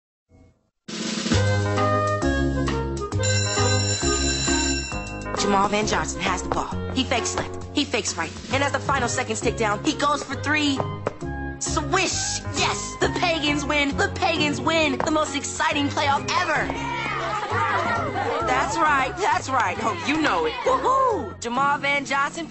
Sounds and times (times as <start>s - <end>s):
Music: 0.3s - 22.5s
Speech: 5.4s - 10.8s, 11.6s - 16.8s, 18.3s - 22.5s.